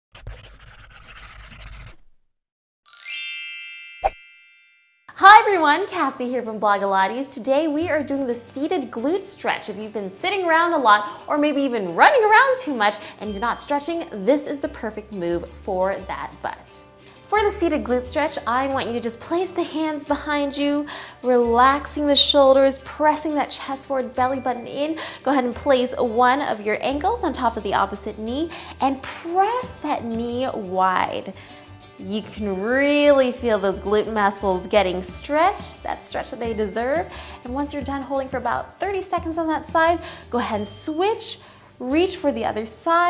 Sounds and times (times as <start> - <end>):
Music: 2.9 - 3.8, 5.1 - 43.0
Speech: 5.1 - 31.4, 32.0 - 43.0.